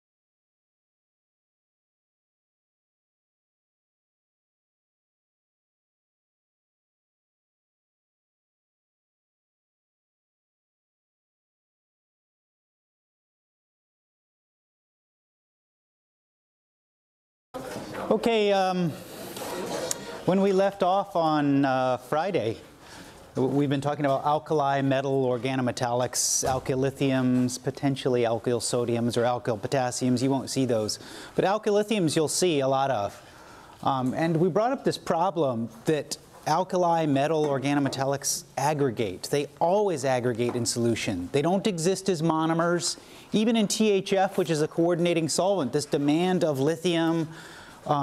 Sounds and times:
Speech: 17.6s - 22.7s, 23.4s - 33.2s, 33.8s - 48.0s.

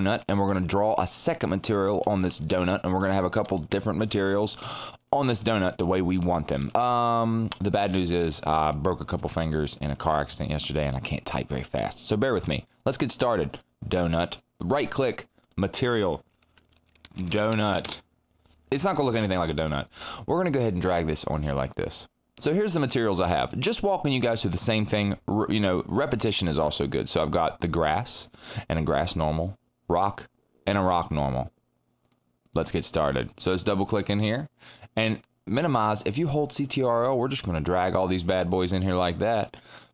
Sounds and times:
Speech: 0.0s - 16.3s, 17.2s - 18.1s, 18.7s - 31.6s, 32.5s - 39.6s.

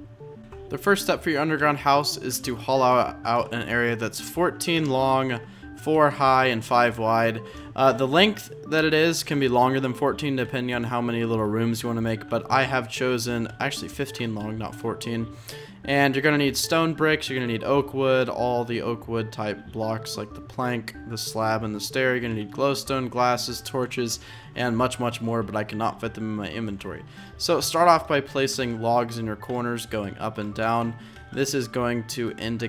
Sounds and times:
Music: 0.0s - 32.6s
Speech: 0.7s - 15.3s, 15.9s - 32.6s.

